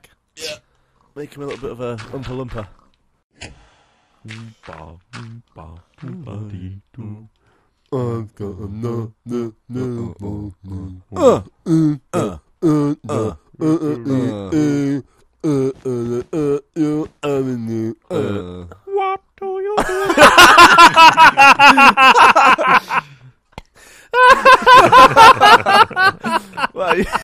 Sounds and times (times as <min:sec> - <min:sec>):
Speech: 0:00.0 - 0:00.6, 0:01.2 - 0:02.8, 0:04.3 - 0:07.3, 0:07.9 - 0:20.0, 0:26.6 - 0:27.2.